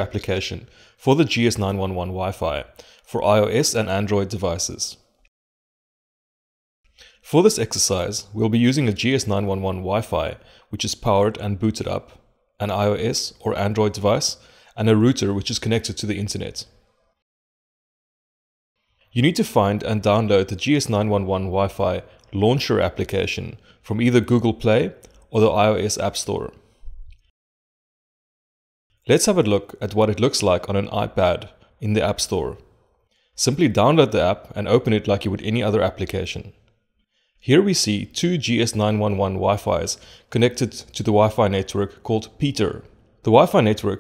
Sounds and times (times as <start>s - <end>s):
Speech: 0.0s - 5.0s, 7.2s - 16.8s, 19.1s - 26.6s, 29.1s - 32.7s, 33.4s - 36.6s, 37.4s - 44.0s.